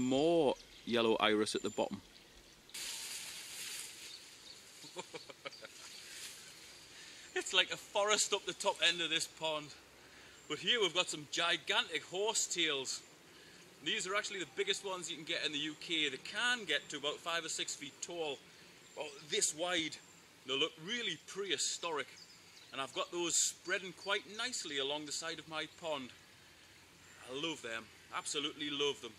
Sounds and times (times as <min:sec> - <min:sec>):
Speech: 0:00.0 - 0:02.0, 0:07.4 - 0:09.8, 0:10.5 - 0:13.0, 0:13.8 - 0:18.4, 0:19.0 - 0:22.2, 0:22.8 - 0:26.2, 0:27.2 - 0:29.1
Outside, rural or natural: 0:00.0 - 0:29.1.